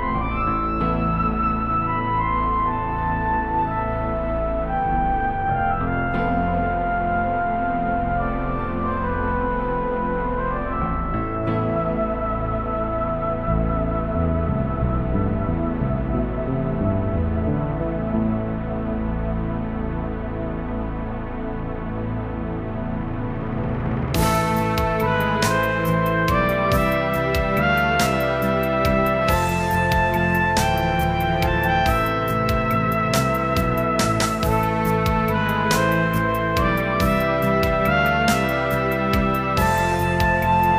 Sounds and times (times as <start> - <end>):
Theme music: 0.0 - 40.7.